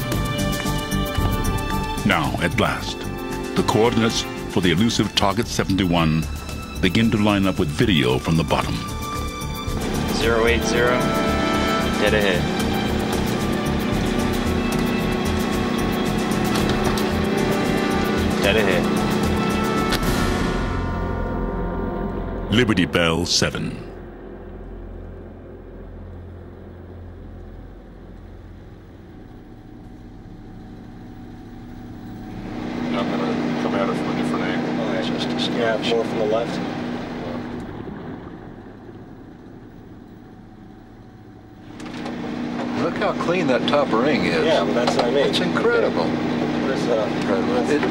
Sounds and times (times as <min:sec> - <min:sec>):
Music: 0:00.0 - 0:31.0.